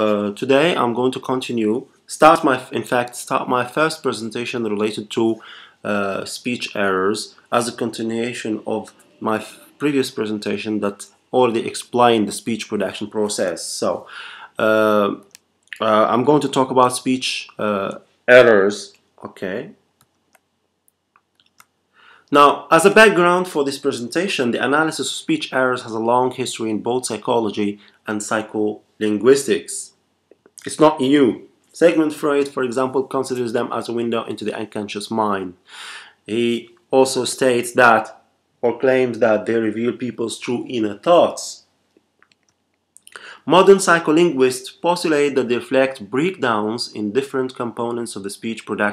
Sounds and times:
Male speech, man speaking: 0:00.0 - 0:19.8, 0:22.3 - 0:30.0, 0:30.6 - 0:35.6, 0:36.3 - 0:41.7, 0:43.1 - 0:48.9.

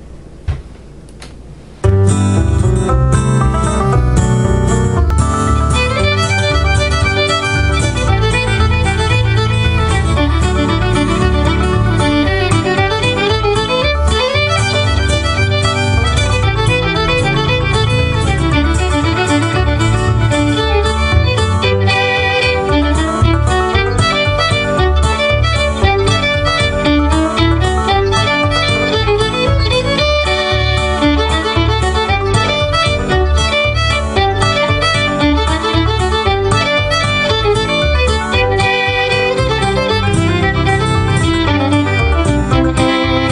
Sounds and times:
Classical music: 0:01.9 - 0:43.3
Violin, fiddle: 0:05.1 - 0:43.3.

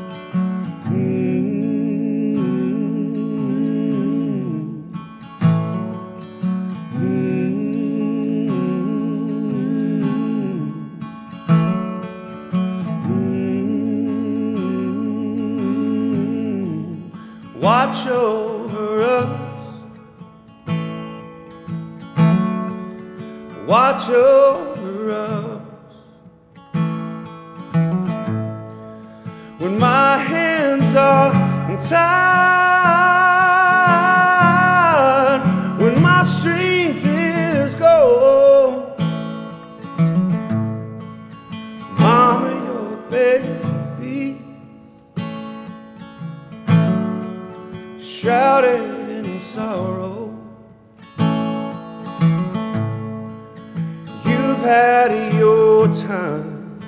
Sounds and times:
Music: 0:00.0 - 0:56.8.

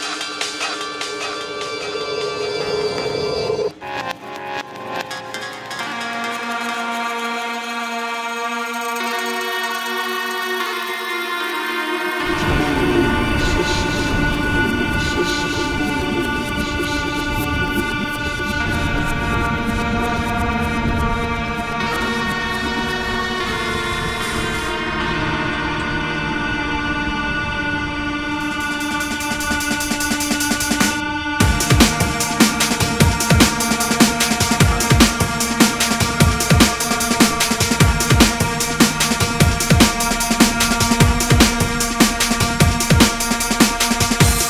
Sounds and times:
Electronic music: 0:00.0 - 0:44.4.

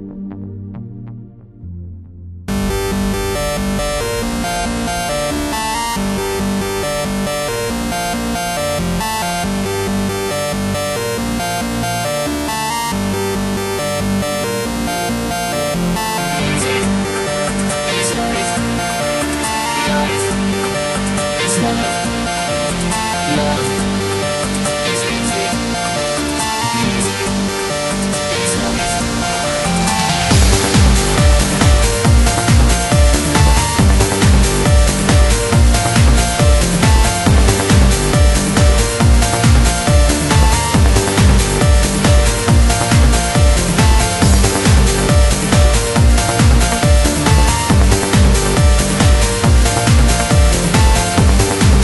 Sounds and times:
Music: 0:00.0 - 0:51.8.

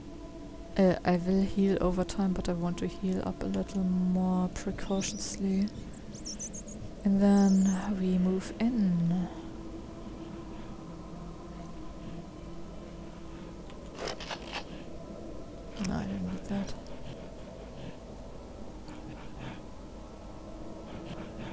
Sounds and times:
Speech: 0:00.8 - 0:05.8, 0:07.0 - 0:09.4, 0:15.8 - 0:16.8.

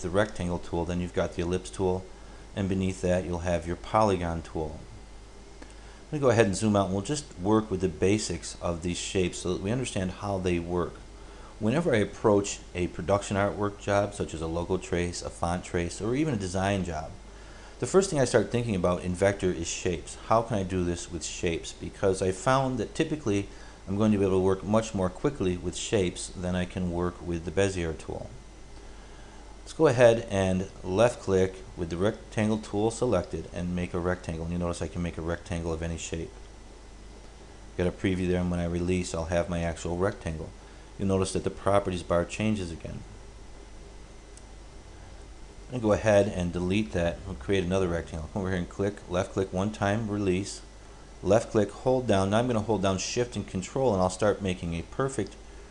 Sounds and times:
Speech: 0:00.0 - 0:05.0, 0:06.1 - 0:11.0, 0:11.6 - 0:17.2, 0:17.8 - 0:28.4, 0:29.7 - 0:36.4, 0:37.8 - 0:43.1, 0:45.7 - 0:55.4.

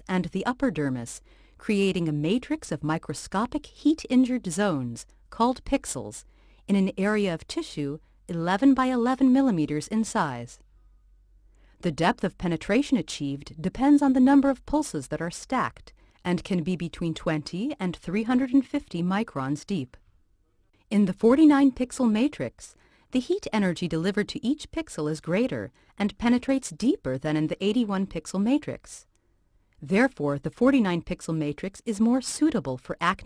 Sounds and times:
Speech: 0:00.0 - 0:10.6, 0:11.8 - 0:20.0, 0:20.9 - 0:29.1, 0:29.8 - 0:33.2.

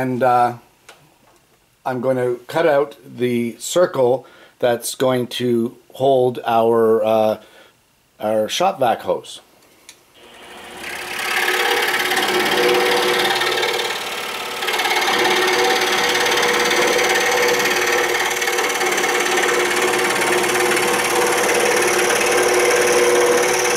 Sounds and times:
Speech: 0:00.0 - 0:00.6, 0:01.9 - 0:07.4, 0:08.2 - 0:09.5
Drill: 0:10.2 - 0:23.7.

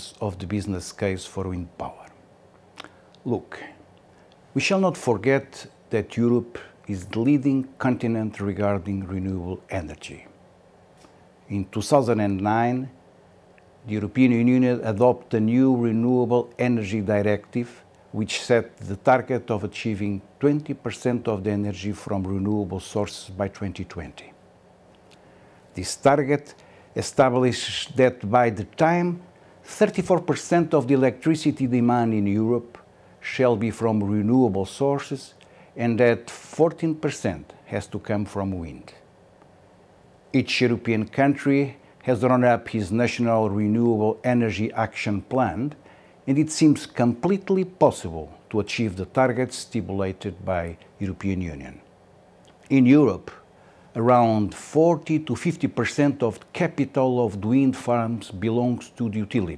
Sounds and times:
Speech: 0:00.0 - 0:02.2, 0:03.2 - 0:03.8, 0:04.6 - 0:10.4, 0:11.5 - 0:13.0, 0:13.8 - 0:24.4, 0:25.8 - 0:39.1, 0:40.3 - 0:51.9, 0:52.7 - 0:59.5.

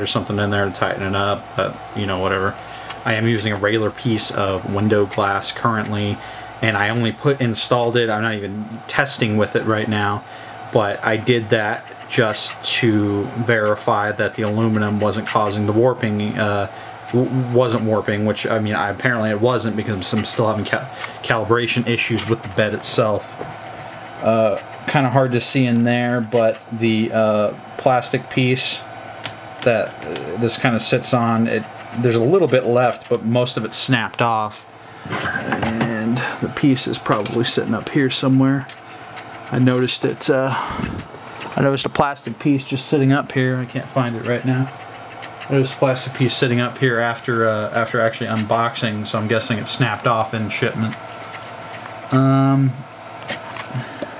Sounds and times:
Speech: 0:00.0 - 0:23.4, 0:24.2 - 0:28.9, 0:29.6 - 0:34.7, 0:35.4 - 0:38.8, 0:39.5 - 0:40.6, 0:41.6 - 0:44.8, 0:45.5 - 0:51.0, 0:52.1 - 0:52.9.

